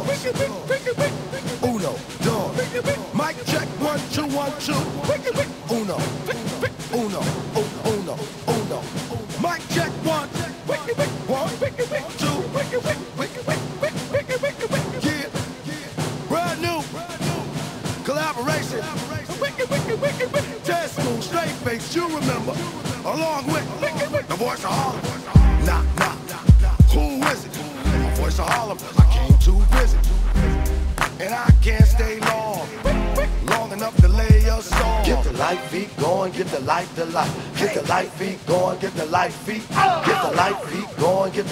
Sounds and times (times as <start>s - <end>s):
Music: 0.0s - 41.5s.